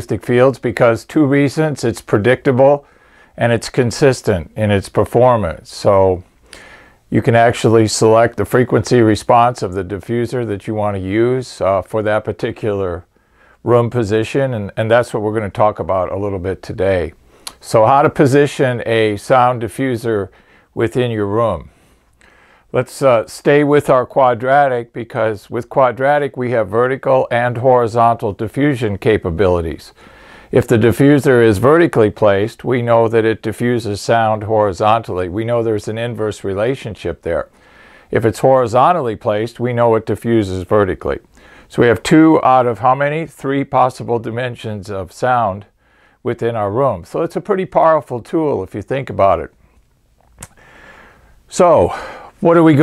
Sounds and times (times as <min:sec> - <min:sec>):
Speech: 0:00.0 - 0:06.3, 0:07.1 - 0:21.7, 0:22.7 - 0:37.5, 0:38.1 - 0:49.6, 0:51.5 - 0:52.8.